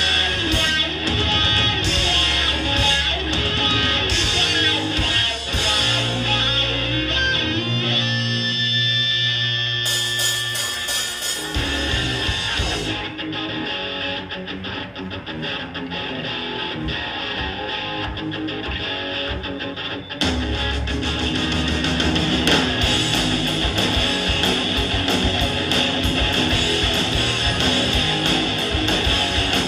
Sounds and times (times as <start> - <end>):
Bass guitar: 0.0 - 29.6
Electric guitar: 0.0 - 29.6.